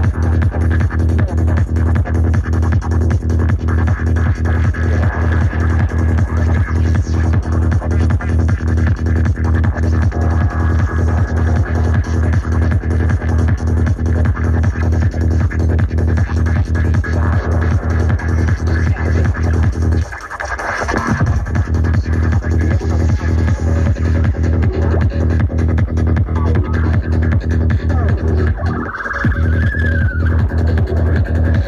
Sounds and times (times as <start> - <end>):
Trance music: 0.0 - 31.6.